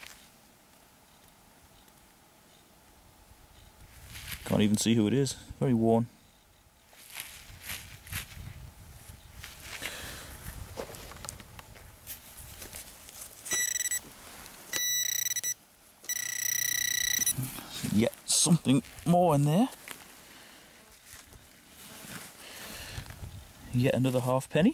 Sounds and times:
Outside, rural or natural: 0.0s - 24.7s
Speech: 4.4s - 6.1s, 17.7s - 19.8s, 23.7s - 24.7s
Beep, bleep: 13.5s - 14.0s, 14.8s - 17.4s.

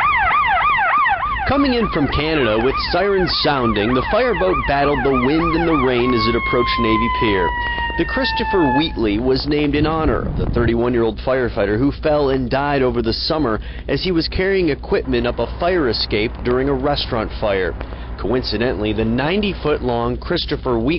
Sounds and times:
Vehicle: 0.0s - 20.9s
Speech: 1.5s - 20.9s.

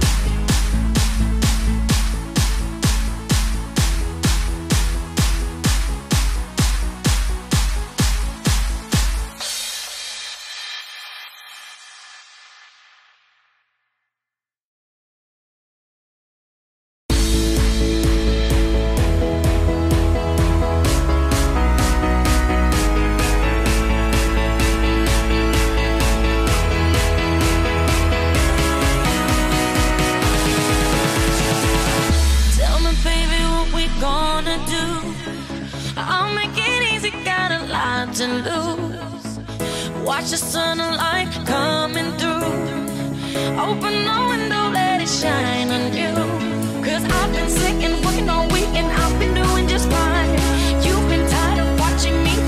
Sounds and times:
Music: 0.0s - 13.7s, 17.1s - 52.4s.

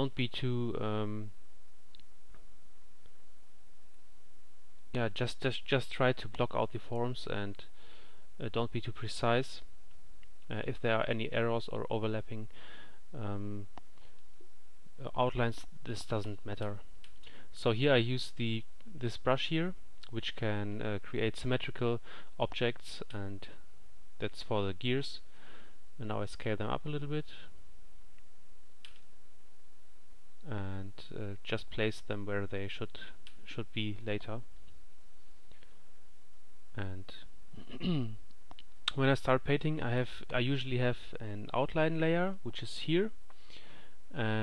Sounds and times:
Speech: 0.0s - 1.4s, 4.9s - 7.7s, 8.4s - 9.7s, 10.5s - 12.5s, 13.1s - 13.7s, 15.0s - 16.9s, 17.5s - 23.6s, 24.2s - 25.3s, 26.0s - 27.6s, 30.4s - 34.5s, 36.7s - 38.2s, 38.9s - 43.2s, 44.1s - 44.4s.

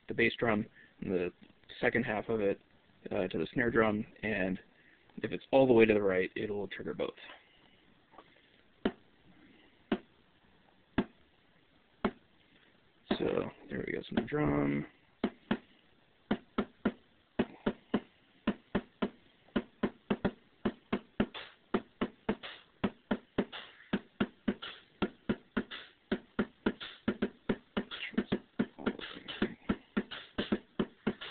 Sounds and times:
Speech: 0.1s - 7.4s, 13.1s - 15.0s, 28.0s - 29.6s
Drum machine: 13.1s - 13.5s, 16.3s - 31.3s.

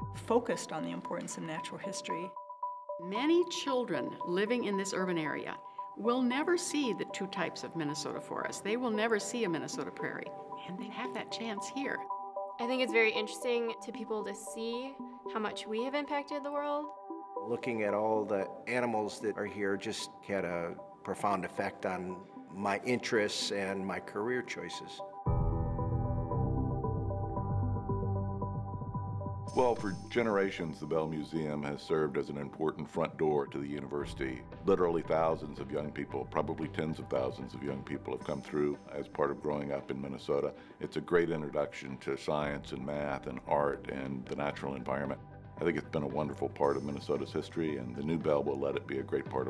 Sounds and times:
Music: 0.0s - 49.5s
Speech: 0.2s - 2.3s, 3.1s - 12.0s, 12.6s - 16.9s, 17.5s - 25.0s, 29.6s - 49.5s.

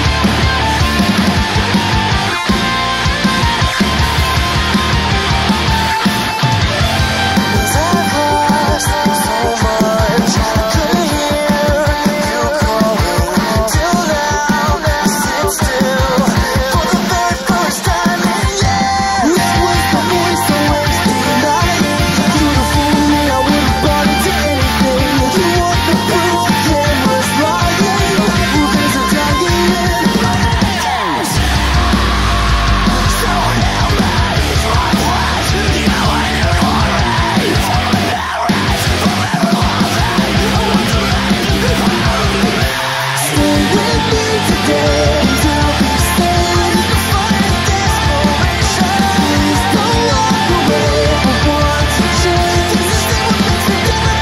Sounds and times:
Music: 0.0s - 54.2s.

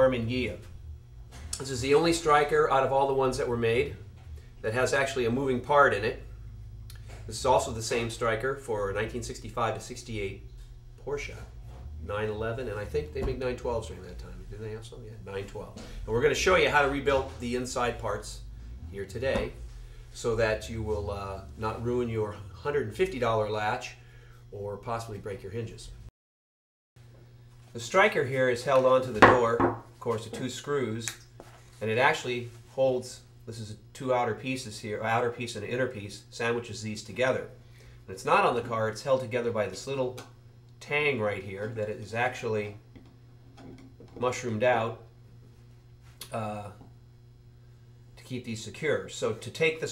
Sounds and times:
Speech: 0.0s - 0.7s, 1.6s - 6.3s, 7.3s - 19.6s, 20.2s - 26.0s, 27.8s - 31.2s, 31.8s - 42.8s, 44.1s - 45.1s, 46.2s - 46.9s, 48.2s - 49.9s.

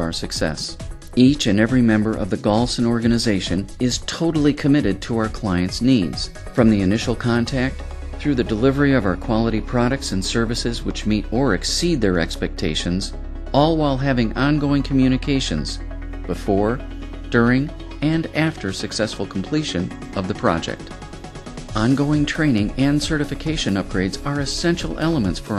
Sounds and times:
Music: 0.0s - 25.5s
Narration, monologue: 0.0s - 25.5s.

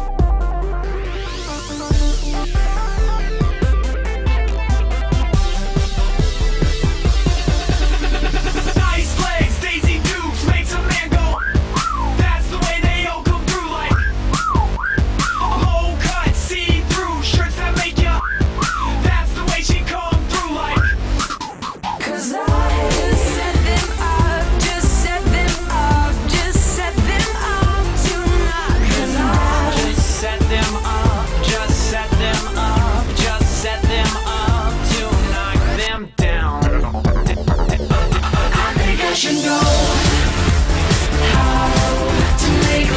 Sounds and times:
Exciting music: 0.0s - 42.9s.

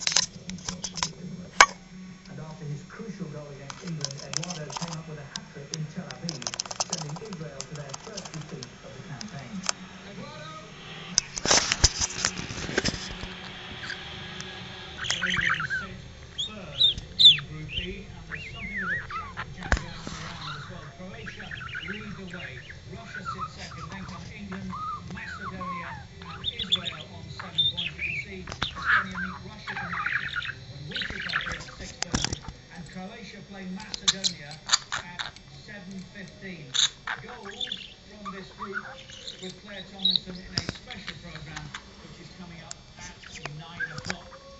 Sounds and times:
Speech: 0.2s - 10.8s, 15.0s - 44.6s
Bird: 3.8s - 33.0s, 33.8s - 44.6s
Domestic animals, pets: 12.2s - 32.5s, 36.8s - 41.8s, 43.0s - 44.6s.

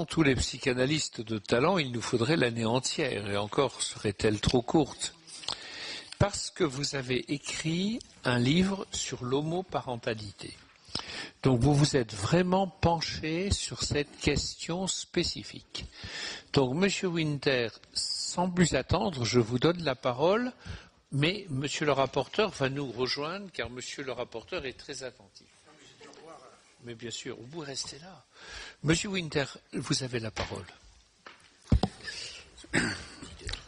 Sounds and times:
Speech: 0.0s - 5.2s, 6.2s - 10.6s, 11.4s - 15.8s, 16.6s - 20.6s, 21.2s - 28.2s, 28.8s - 30.8s.

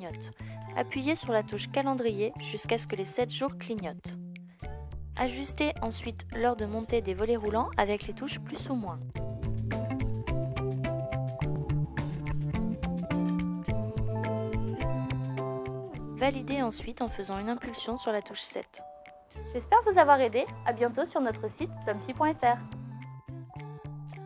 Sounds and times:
Speech: 0.0s - 4.2s, 5.2s - 9.0s, 16.2s - 18.8s, 19.6s - 22.7s
Music: 0.0s - 24.2s.

